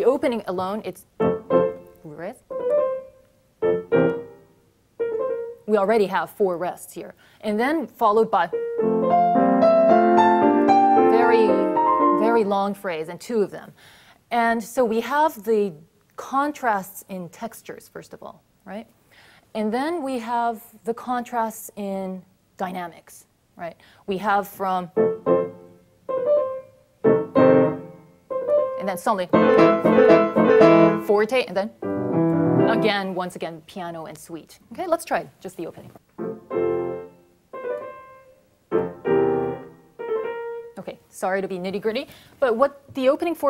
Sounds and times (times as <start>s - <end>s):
Speech: 0.0s - 1.1s, 2.0s - 2.4s, 5.7s - 8.5s, 11.1s - 11.6s, 12.2s - 18.9s, 19.6s - 24.9s, 28.8s - 29.4s, 31.1s - 31.8s, 32.7s - 36.0s, 40.8s - 43.5s
Piano: 1.1s - 6.0s, 8.4s - 12.6s, 24.9s - 33.1s, 36.1s - 40.8s.